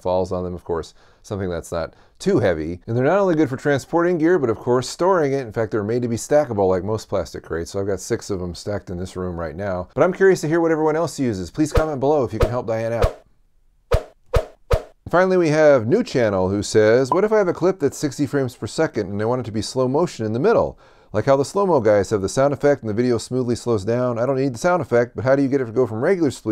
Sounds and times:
Speech: 0.0 - 13.2, 15.1 - 26.5
Inside, small room: 0.0 - 26.5.

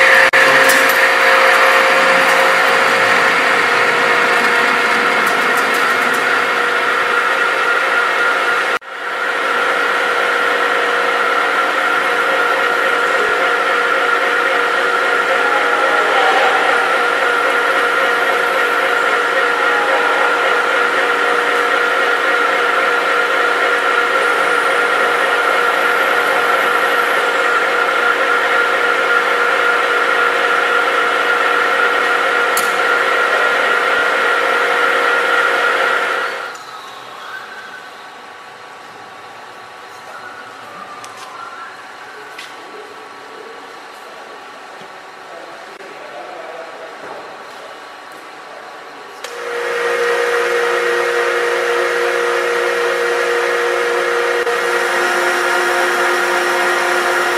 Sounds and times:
Tools: 0.4 - 3.4, 4.4 - 6.6.

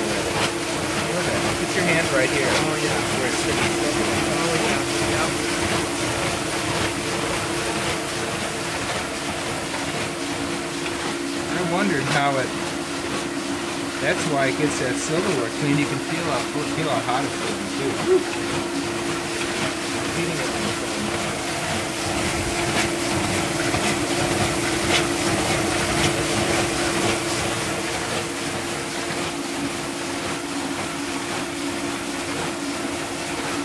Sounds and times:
Pump (liquid): 0.0 - 33.6
Water: 0.0 - 33.6.

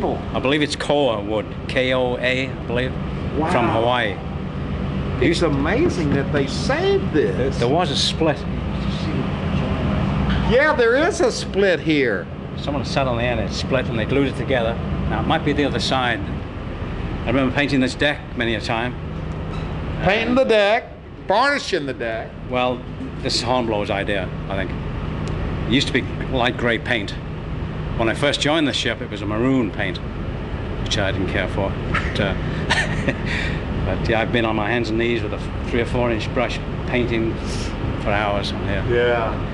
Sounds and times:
Speech: 0.0 - 4.2, 5.2 - 9.8, 10.5 - 16.3, 17.3 - 19.0, 20.0 - 24.8, 25.7 - 27.2, 28.0 - 30.0, 30.9 - 32.4, 33.9 - 39.4.

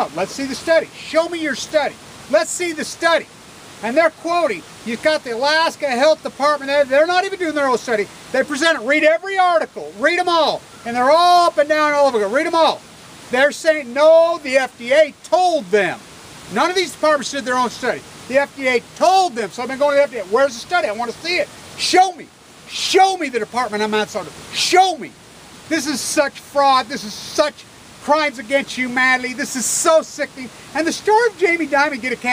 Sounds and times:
Speech: 0.0 - 32.3.

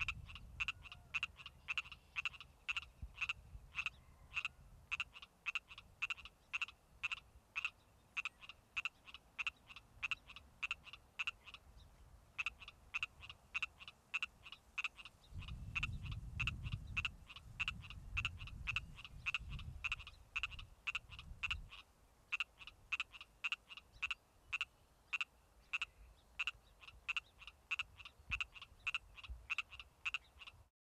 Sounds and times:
Frog: 0.0 - 11.7, 12.4 - 30.7.

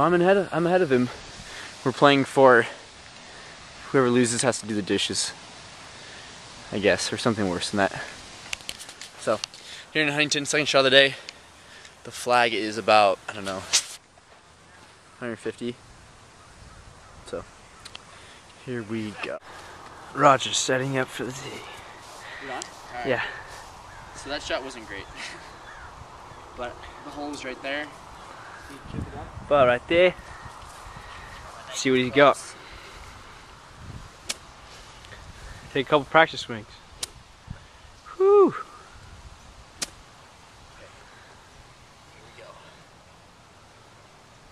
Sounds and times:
Outside, urban or manmade: 0.0 - 44.5.

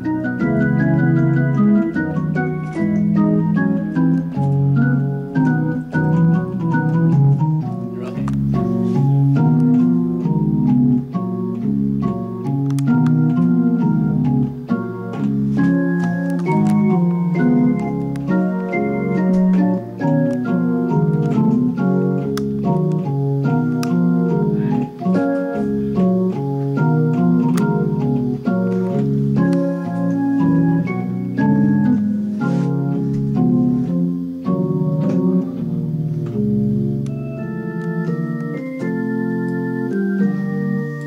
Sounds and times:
Music: 0.0 - 41.0.

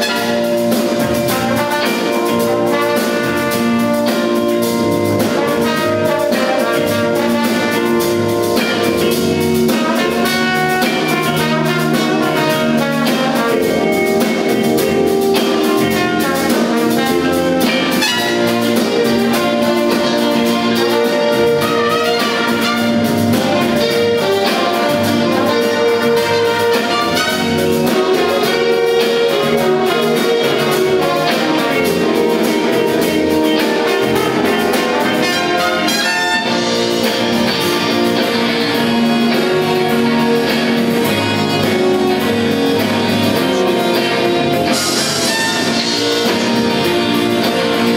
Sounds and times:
Music: 0.0 - 47.9.

